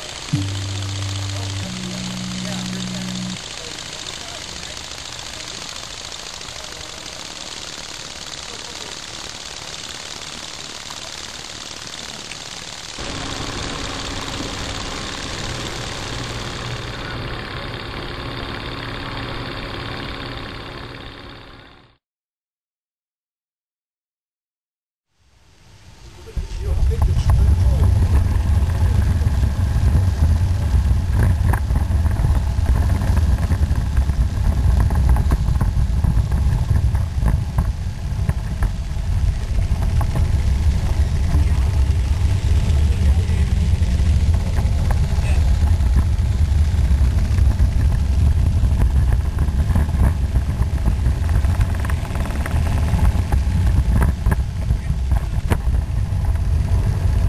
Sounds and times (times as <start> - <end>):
Jackhammer: 0.0 - 22.0, 26.9 - 57.2
Outside, rural or natural: 0.0 - 22.0, 25.1 - 57.2
Speech: 8.3 - 9.1, 26.1 - 28.2, 42.6 - 43.5, 44.5 - 45.5.